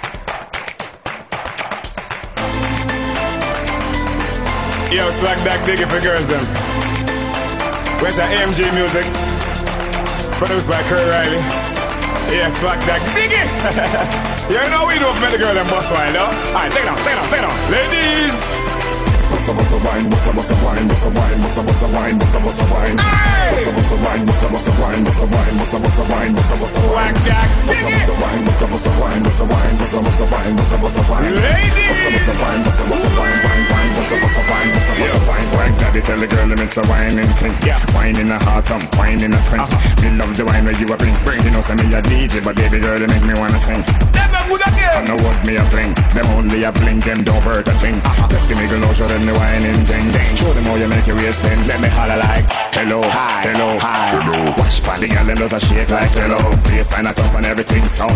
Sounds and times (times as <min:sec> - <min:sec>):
Music: 0:00.0 - 0:58.1.